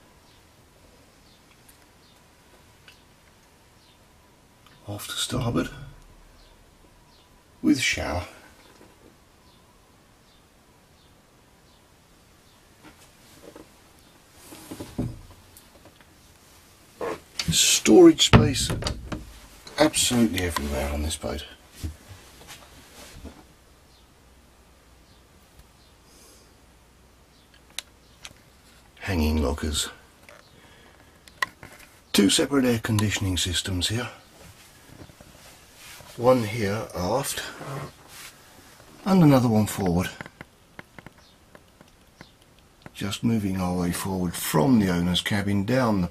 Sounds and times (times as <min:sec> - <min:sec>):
Speech: 0:04.8 - 0:06.0, 0:07.6 - 0:08.5, 0:17.4 - 0:18.9, 0:19.7 - 0:21.6, 0:29.0 - 0:30.0, 0:32.1 - 0:34.3, 0:36.2 - 0:37.9, 0:39.0 - 0:40.3, 0:43.0 - 0:46.1.